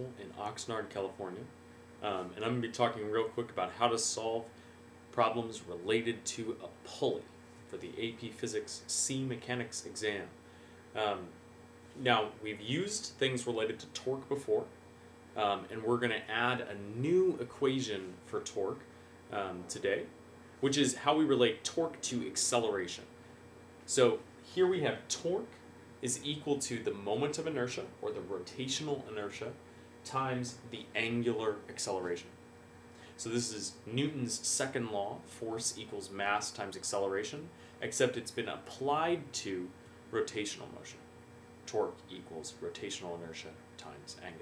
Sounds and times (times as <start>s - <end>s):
Speech: 0.0s - 4.5s, 5.1s - 10.4s, 11.0s - 11.4s, 12.0s - 14.7s, 15.4s - 23.1s, 23.9s - 32.4s, 33.2s - 41.0s, 41.7s - 44.4s.